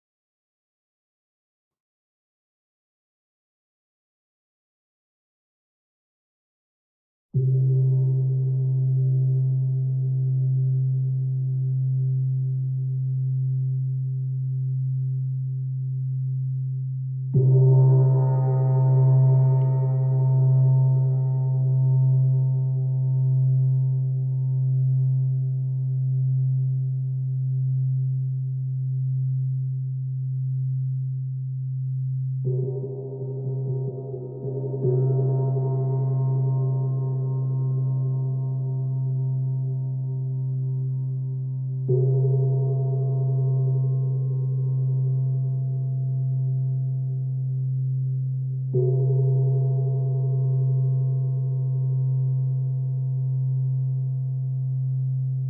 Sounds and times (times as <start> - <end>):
Gong: 17.3 - 29.3, 32.1 - 55.4.